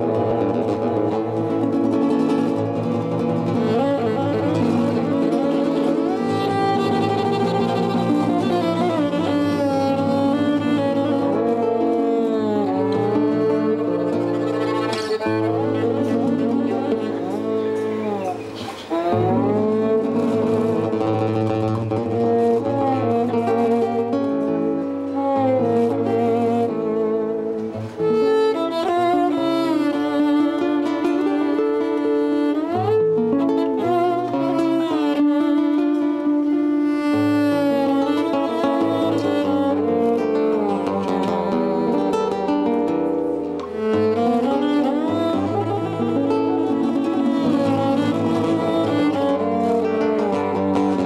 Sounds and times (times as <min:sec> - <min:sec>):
Cello: 0:00.0 - 0:51.0.